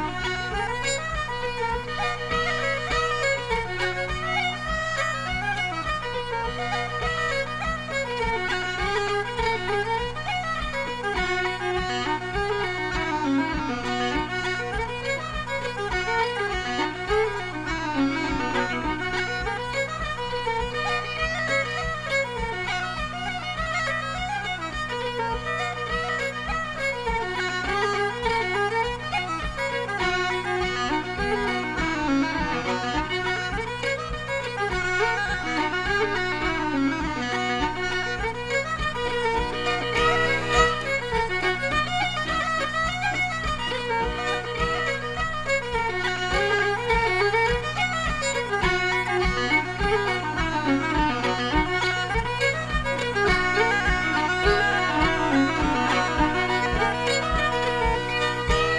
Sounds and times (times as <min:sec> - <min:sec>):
Traditional music: 0:00.0 - 0:58.7.